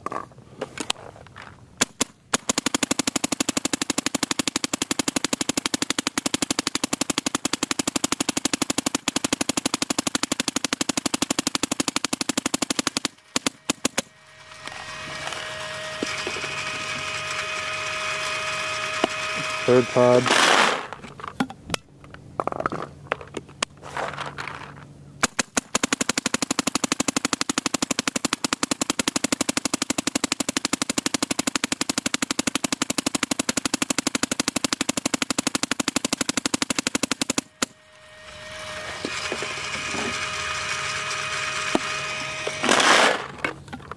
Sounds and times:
Outside, rural or natural: 0:00.0 - 0:43.9
Speech: 0:19.7 - 0:20.3.

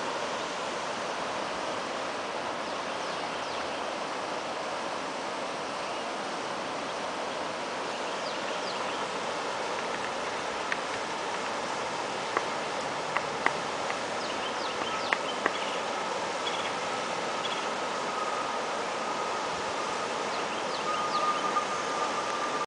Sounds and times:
Stream: 0:00.0 - 0:22.6
Waterfall: 0:00.0 - 0:22.6.

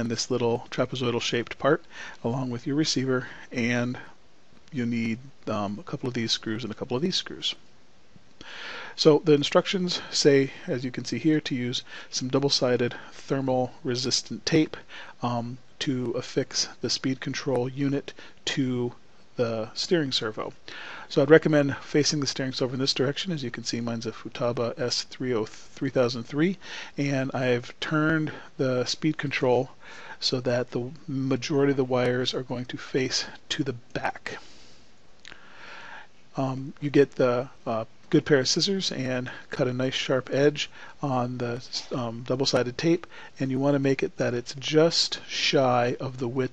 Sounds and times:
Speech: 0:00.0 - 0:07.6, 0:09.0 - 0:34.4, 0:36.3 - 0:46.5.

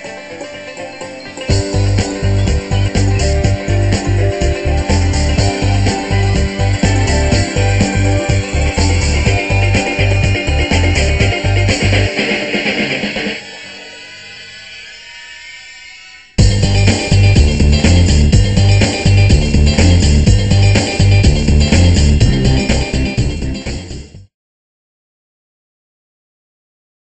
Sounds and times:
Music: 0:00.0 - 0:24.3.

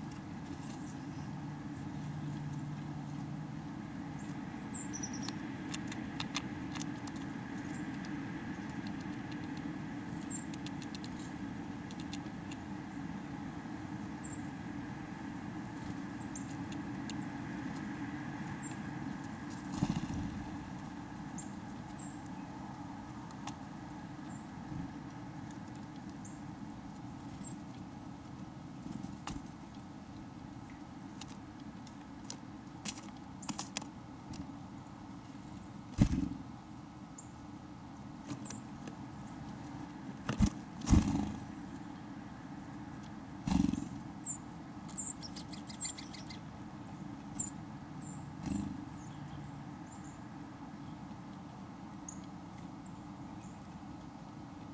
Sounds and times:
Bird: 0:00.0 - 0:03.2, 0:04.1 - 0:13.2, 0:14.2 - 0:14.6, 0:15.2 - 0:23.6, 0:40.3 - 0:42.2, 0:43.4 - 0:54.3.

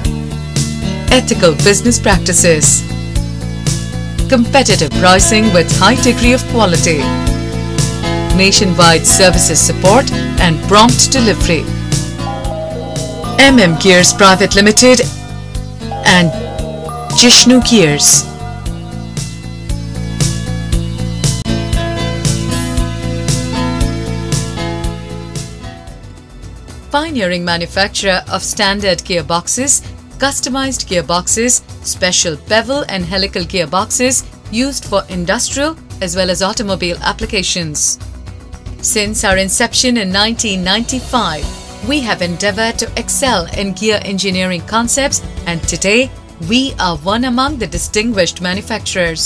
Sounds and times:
Music: 0:00.0 - 0:49.2
Speech: 0:01.1 - 0:02.9, 0:04.3 - 0:07.1, 0:08.4 - 0:11.7, 0:13.4 - 0:15.2, 0:16.0 - 0:16.5, 0:17.2 - 0:18.3, 0:27.0 - 0:38.0, 0:38.8 - 0:49.2.

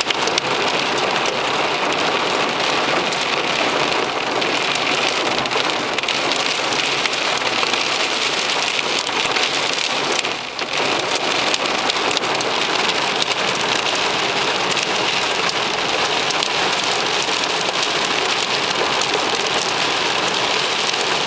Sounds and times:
Rain on surface: 0:00.0 - 0:21.2.

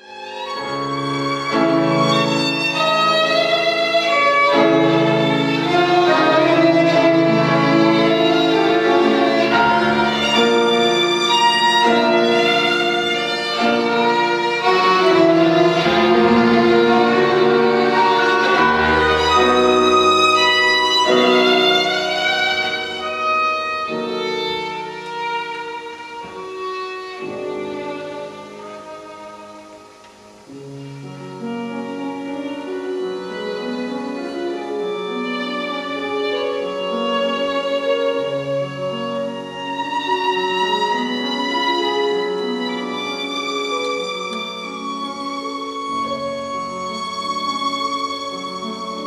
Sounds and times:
Violin, fiddle: 0:00.0 - 0:49.0.

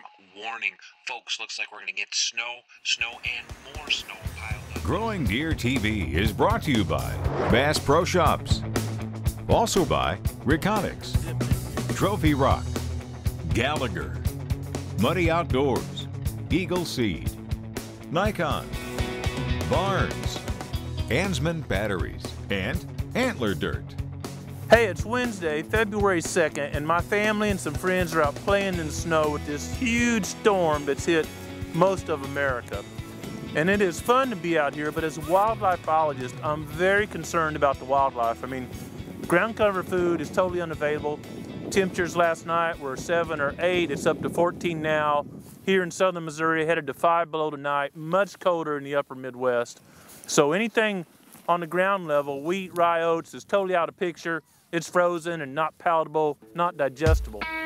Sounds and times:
Speech: 0:00.0 - 0:08.6, 0:09.5 - 0:12.7, 0:13.5 - 0:14.2, 0:15.0 - 0:17.4, 0:18.1 - 0:18.7, 0:19.6 - 0:20.4, 0:21.1 - 0:24.0, 0:24.7 - 0:32.8, 0:33.6 - 0:57.5
Music: 0:03.2 - 0:44.3, 0:56.3 - 0:57.6.

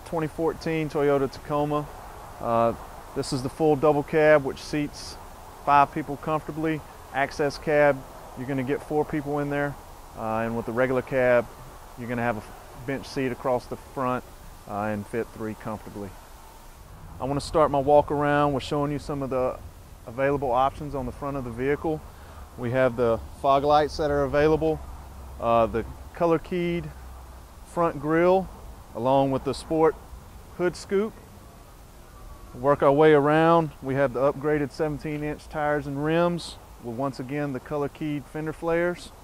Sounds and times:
Speech: 0:00.0 - 0:16.2, 0:17.2 - 0:22.0, 0:22.6 - 0:24.8, 0:25.4 - 0:27.0, 0:27.7 - 0:30.0, 0:30.6 - 0:31.2, 0:32.6 - 0:39.2.

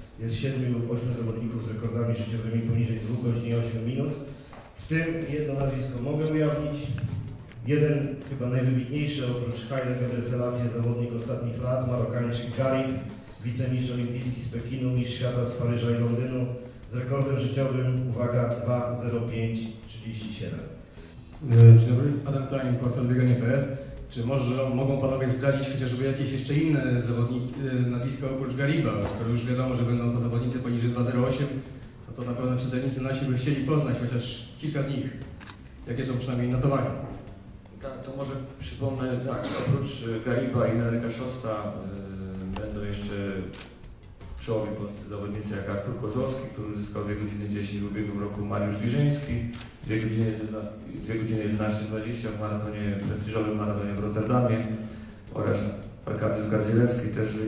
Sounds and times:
Speech: 0:00.0 - 0:20.8, 0:21.4 - 0:35.2, 0:35.8 - 0:43.7, 0:44.4 - 0:57.4.

